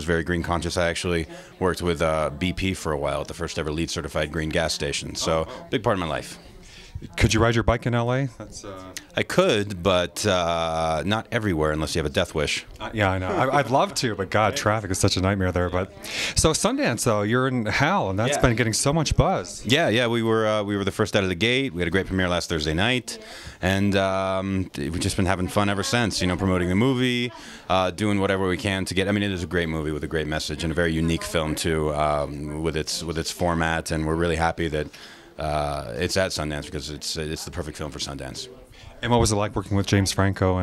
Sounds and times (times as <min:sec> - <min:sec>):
Speech: 0:00.0 - 0:40.6.